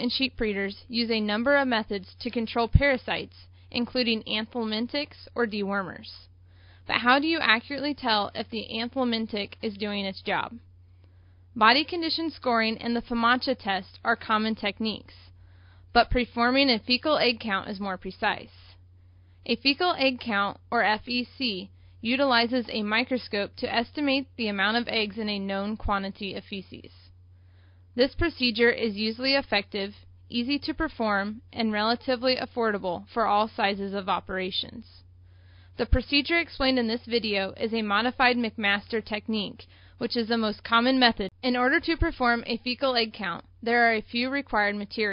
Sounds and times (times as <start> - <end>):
Speech: 0.0 - 6.3, 6.9 - 10.6, 11.6 - 15.3, 16.0 - 18.8, 19.5 - 27.1, 28.0 - 35.0, 35.8 - 45.1.